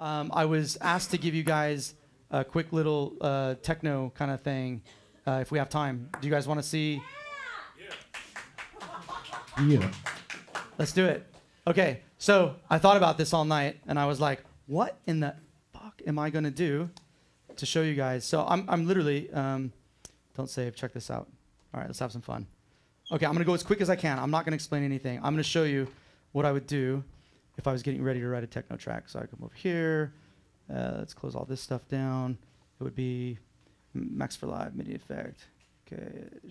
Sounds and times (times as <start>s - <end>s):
Speech: 0.0s - 8.0s, 9.6s - 10.0s, 10.8s - 17.0s, 17.6s - 19.8s, 20.4s - 22.5s, 23.1s - 33.4s, 34.0s - 36.5s.